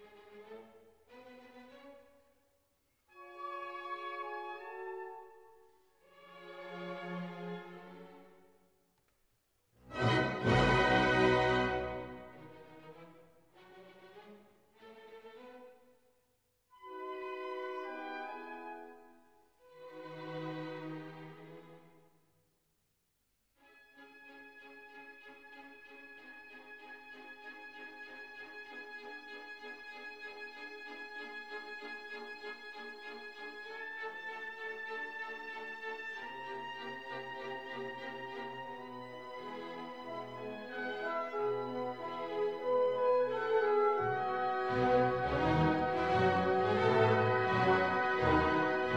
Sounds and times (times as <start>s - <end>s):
Classical music: 3.1s - 8.4s, 9.8s - 15.3s, 16.8s - 22.0s, 24.0s - 48.9s.